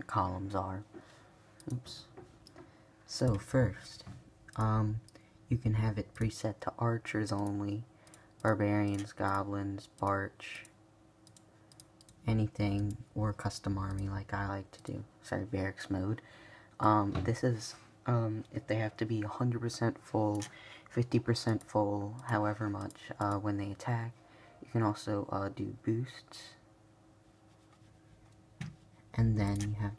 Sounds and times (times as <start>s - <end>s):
Speech: 0.0s - 0.9s, 1.6s - 2.1s, 3.1s - 10.7s, 12.2s - 16.2s, 16.8s - 26.6s, 29.1s - 29.9s.